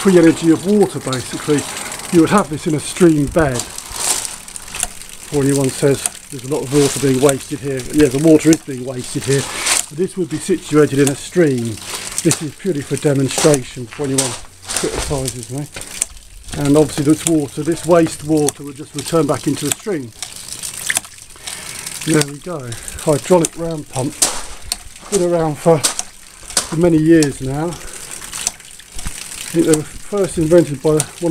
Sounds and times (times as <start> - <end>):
Water: 0.0 - 31.3.